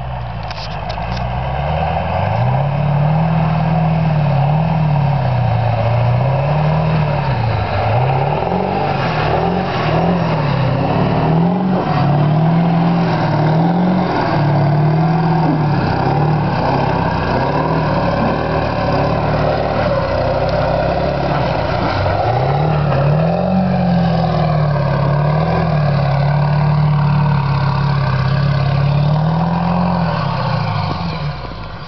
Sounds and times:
Car: 0:00.0 - 0:31.8
Medium engine (mid frequency): 0:00.0 - 0:31.8
Accelerating, revving, vroom: 0:01.0 - 0:31.7.

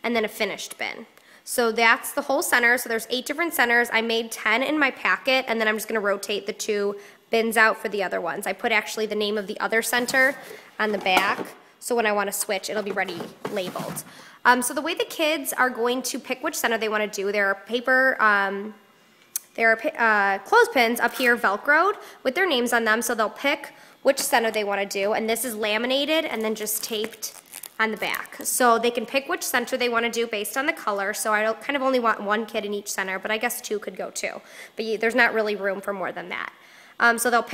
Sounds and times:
Speech: 0:00.0 - 0:18.8, 0:19.4 - 0:37.5.

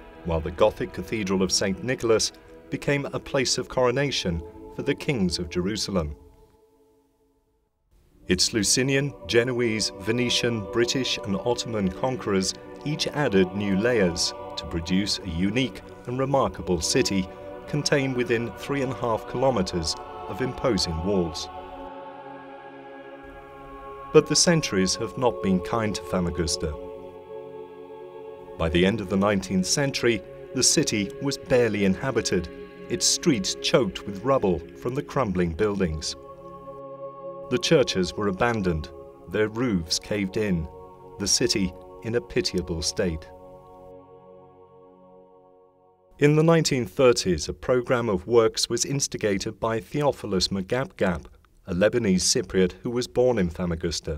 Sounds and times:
Music: 0:00.0 - 0:54.1
Speech: 0:00.3 - 0:06.2, 0:08.3 - 0:21.5, 0:24.2 - 0:26.8, 0:28.6 - 0:36.2, 0:37.5 - 0:43.3, 0:46.2 - 0:54.1.

